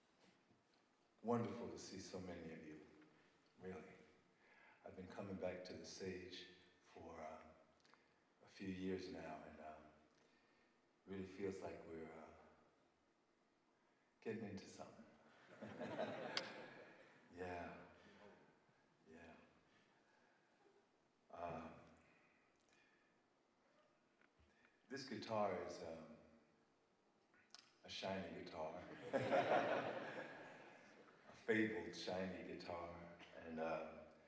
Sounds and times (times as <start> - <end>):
Speech: 1.2 - 3.0, 3.6 - 4.2, 4.8 - 7.6, 8.4 - 10.0, 11.0 - 12.6, 14.2 - 15.2, 17.3 - 18.0, 19.1 - 19.5, 21.3 - 21.9, 24.9 - 26.3, 27.8 - 29.0, 31.3 - 34.1.